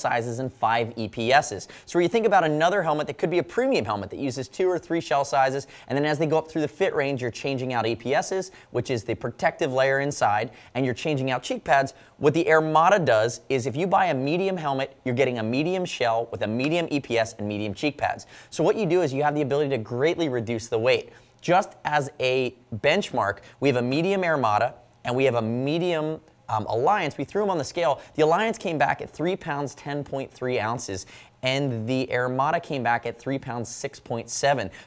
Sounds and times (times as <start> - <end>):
Speech: 0.0 - 34.8.